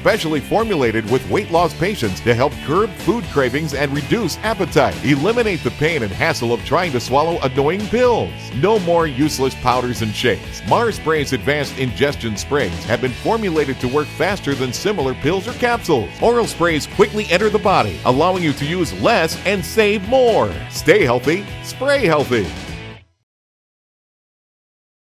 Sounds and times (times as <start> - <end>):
Speech: 0.0 - 22.6
Music: 0.0 - 23.3.